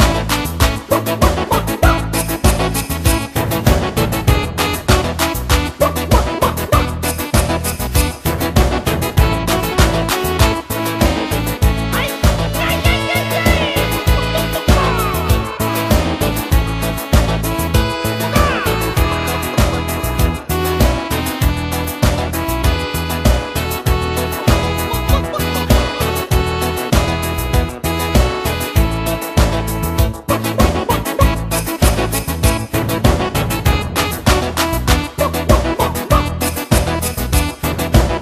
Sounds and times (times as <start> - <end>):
Music: 0.0 - 38.2.